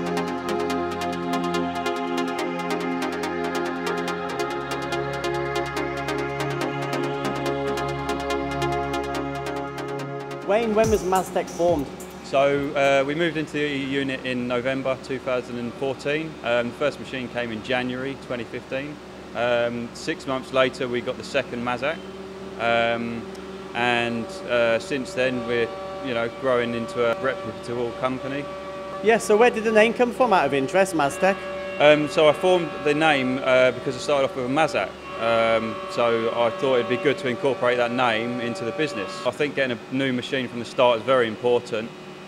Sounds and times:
Music: 0.0s - 18.3s, 21.4s - 39.4s
Speech: 10.5s - 22.0s, 22.6s - 23.2s, 23.8s - 41.9s.

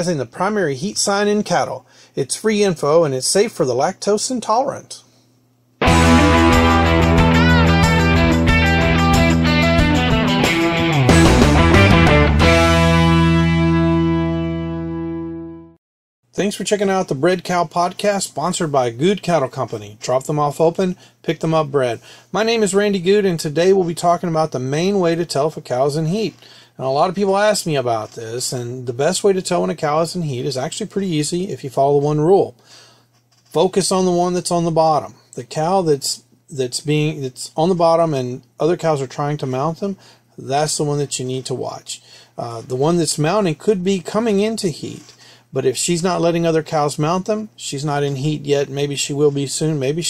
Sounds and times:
Speech: 0.0s - 5.1s, 16.4s - 32.6s, 33.5s - 50.0s.

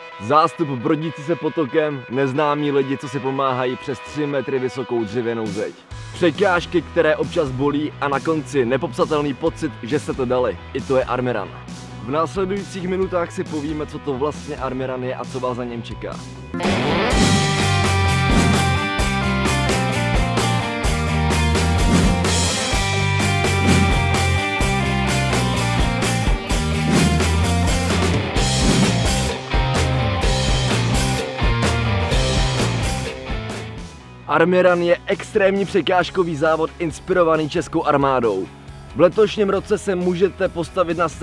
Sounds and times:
Music: 0.0s - 41.2s
Speech: 0.2s - 16.2s, 34.3s - 41.2s.

